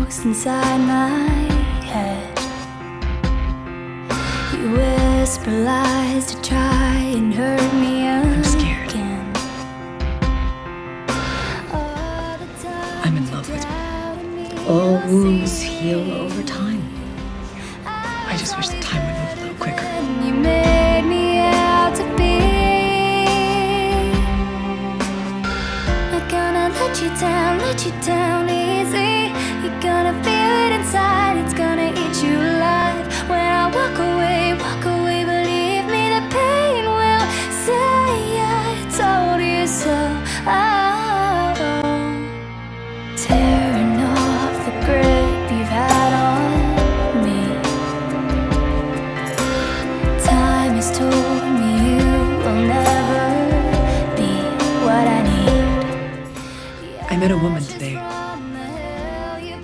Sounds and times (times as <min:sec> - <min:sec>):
Music: 0:00.0 - 0:59.6
Speech: 0:12.8 - 0:13.9, 0:14.5 - 0:17.1, 0:18.1 - 0:20.6, 0:57.0 - 0:58.2.